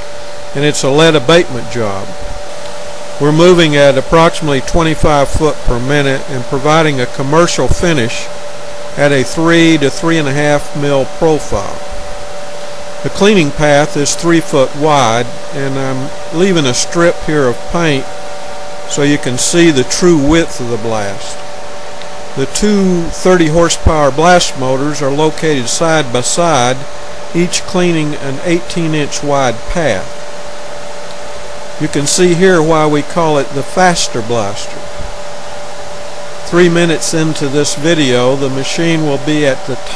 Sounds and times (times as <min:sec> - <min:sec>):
Speech: 0:00.6 - 0:02.2, 0:03.2 - 0:08.3, 0:09.0 - 0:11.8, 0:13.0 - 0:18.1, 0:18.9 - 0:21.4, 0:22.4 - 0:30.1, 0:31.8 - 0:34.8, 0:36.5 - 0:39.9.